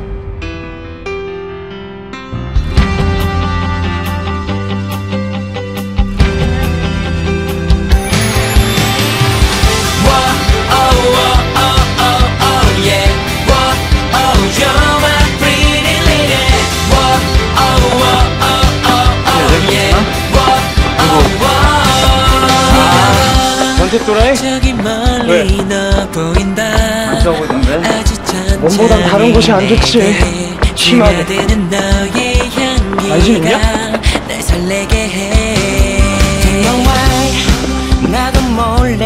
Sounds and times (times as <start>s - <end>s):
Music: 0.0s - 39.0s
Speech: 25.2s - 25.6s, 28.6s - 31.4s, 33.0s - 33.7s.